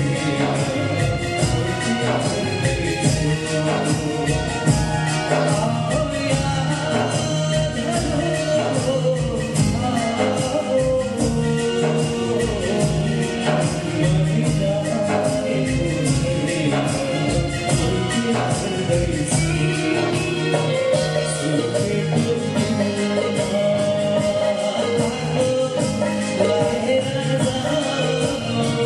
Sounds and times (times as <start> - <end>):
Music: 0.0 - 28.8.